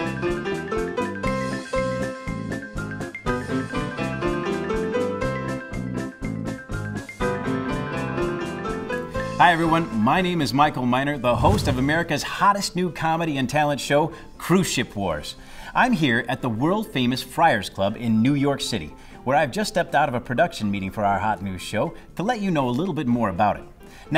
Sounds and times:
Music: 0:00.0 - 0:24.1
Speech: 0:09.4 - 0:24.1.

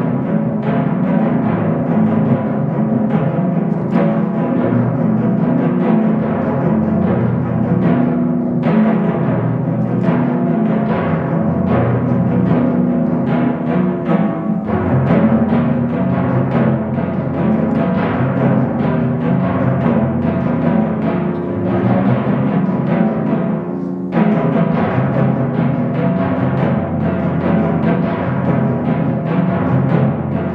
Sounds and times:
Timpani: 0:00.0 - 0:30.5.

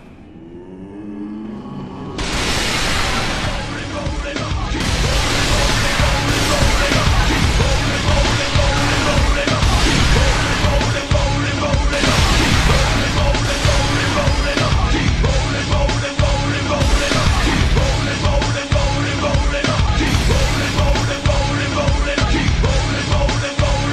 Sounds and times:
Music: 0:00.0 - 0:23.9.

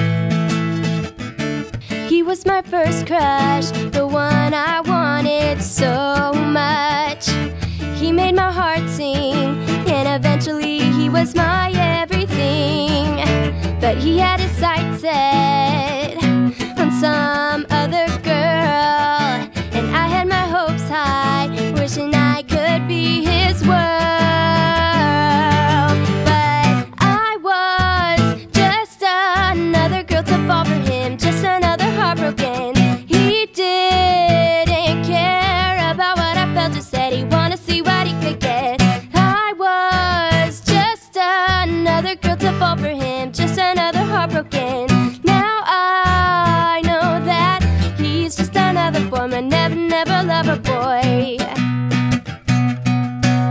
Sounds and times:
Music: 0:00.0 - 0:53.5.

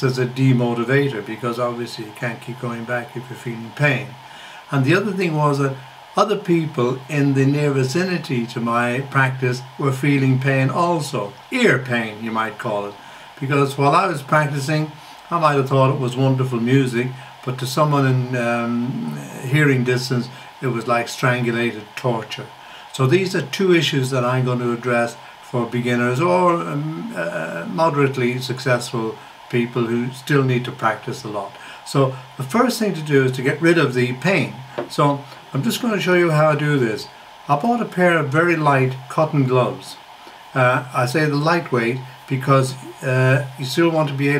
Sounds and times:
Inside, small room: 0:00.0 - 0:44.3
Speech: 0:00.0 - 0:44.3.

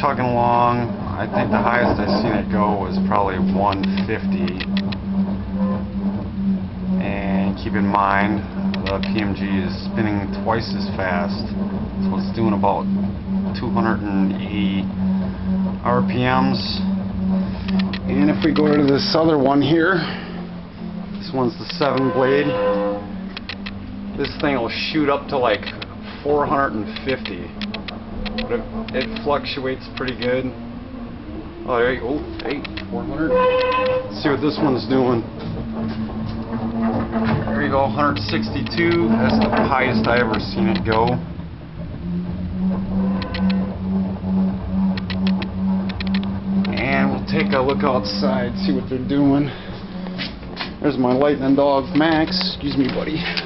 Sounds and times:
Speech: 0:00.0 - 0:04.7, 0:07.0 - 0:11.5, 0:12.1 - 0:12.8, 0:13.6 - 0:14.9, 0:15.8 - 0:16.9, 0:18.1 - 0:20.1, 0:21.2 - 0:22.6, 0:24.2 - 0:27.5, 0:28.5 - 0:30.6, 0:31.7 - 0:33.4, 0:34.1 - 0:35.3, 0:37.5 - 0:41.2, 0:46.7 - 0:49.6, 0:50.8 - 0:53.4.

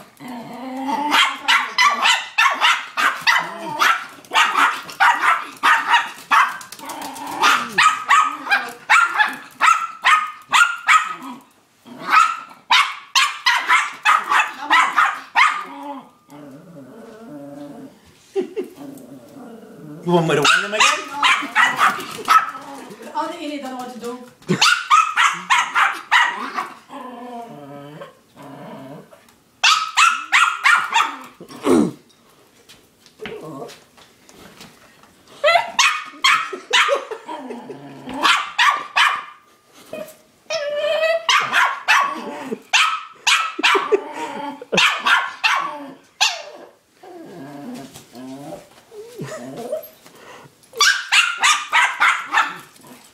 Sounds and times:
Bow-wow: 0:01.1 - 0:06.7, 0:07.3 - 0:11.4, 0:12.0 - 0:15.7, 0:20.4 - 0:22.6, 0:24.5 - 0:26.7, 0:29.6 - 0:31.3, 0:35.5 - 0:37.1, 0:38.1 - 0:39.4, 0:41.3 - 0:44.0, 0:44.7 - 0:46.5, 0:50.8 - 0:52.7.

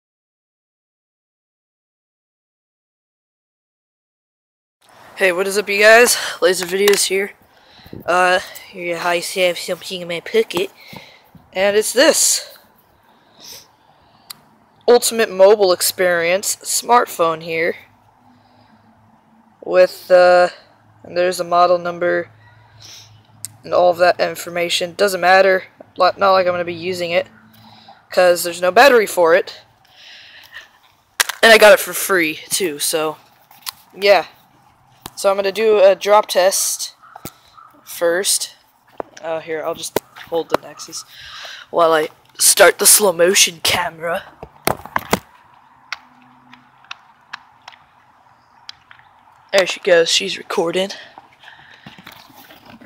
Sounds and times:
Speech: 0:05.2 - 0:07.4, 0:08.0 - 0:10.8, 0:11.6 - 0:12.6, 0:14.9 - 0:17.9, 0:19.6 - 0:22.3, 0:23.6 - 0:27.3, 0:28.1 - 0:29.6, 0:31.4 - 0:33.2, 0:34.0 - 0:34.4, 0:35.2 - 0:37.0, 0:37.8 - 0:38.6, 0:39.2 - 0:41.1, 0:41.7 - 0:44.3, 0:49.5 - 0:51.1.

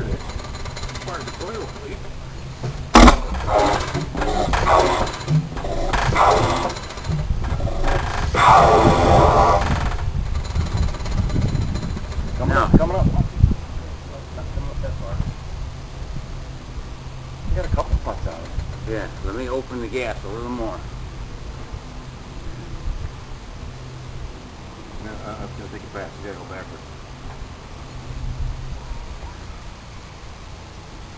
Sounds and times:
Engine: 0:00.0 - 0:31.1.

